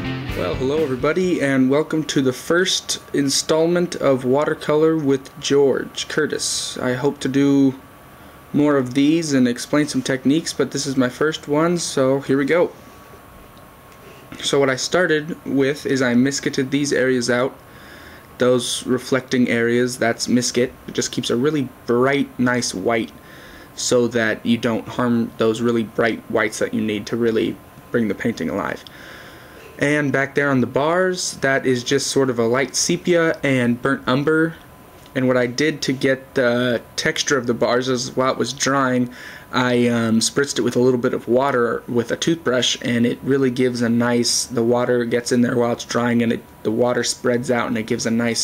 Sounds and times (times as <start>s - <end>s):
Speech: 0.3s - 7.8s, 8.5s - 12.8s, 14.3s - 17.6s, 18.4s - 23.2s, 23.8s - 28.9s, 29.6s - 48.4s.